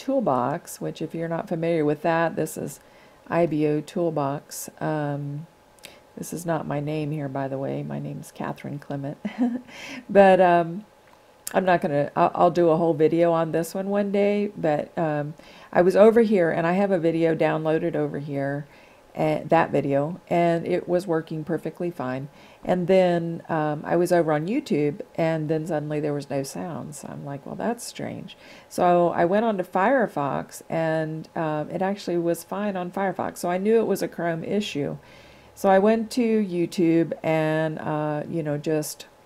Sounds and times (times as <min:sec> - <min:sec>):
Speech: 0:00.0 - 0:05.5, 0:06.2 - 0:09.2, 0:10.1 - 0:10.8, 0:11.5 - 0:35.0, 0:35.6 - 0:39.1.